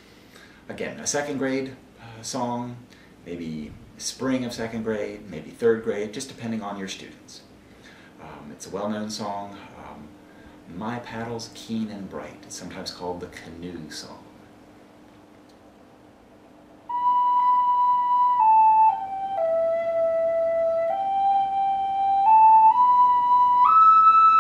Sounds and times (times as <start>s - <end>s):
Speech: 0.7s - 7.5s, 8.2s - 14.4s.